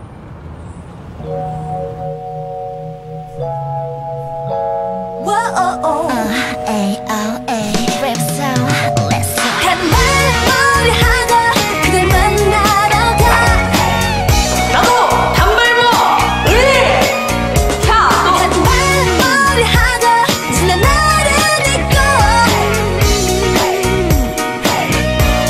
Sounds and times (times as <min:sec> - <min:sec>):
Music of Asia: 0:09.4 - 0:25.5.